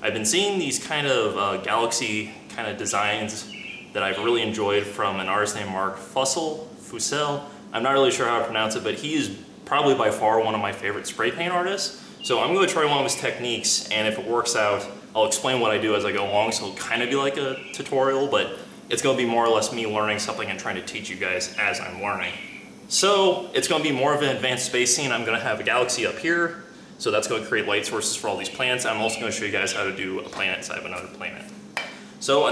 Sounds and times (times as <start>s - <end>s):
Speech: 0.0s - 31.6s, 32.2s - 32.5s.